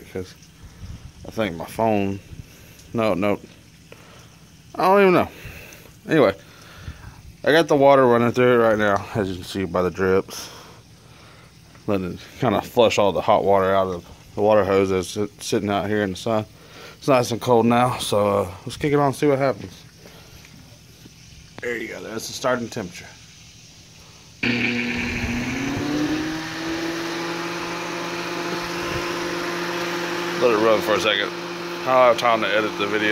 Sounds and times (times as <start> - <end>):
Speech: 0.0 - 0.4, 1.3 - 2.2, 2.9 - 3.5, 4.8 - 5.4, 6.0 - 6.4, 7.4 - 10.5, 11.9 - 19.8, 21.6 - 23.2, 30.4 - 33.1.